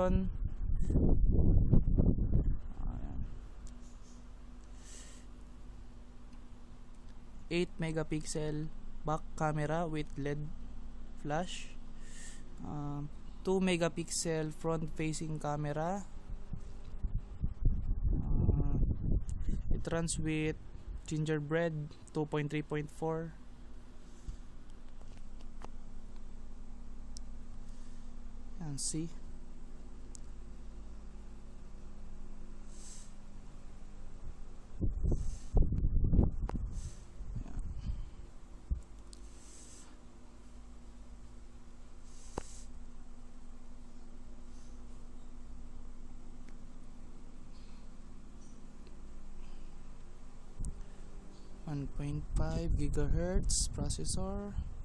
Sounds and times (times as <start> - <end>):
Speech: 0.0 - 0.4, 2.8 - 3.3, 7.5 - 10.6, 11.2 - 11.8, 12.6 - 16.1, 18.2 - 18.9, 19.7 - 23.4, 28.6 - 29.2, 51.6 - 54.7.